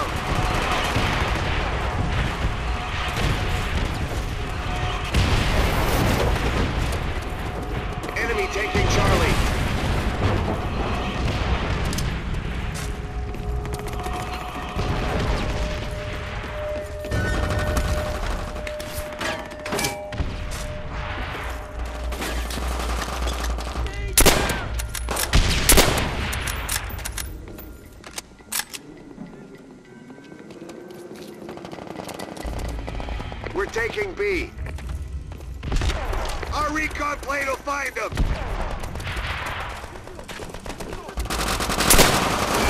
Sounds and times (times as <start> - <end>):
Speech: 33.5 - 34.5, 36.5 - 38.1.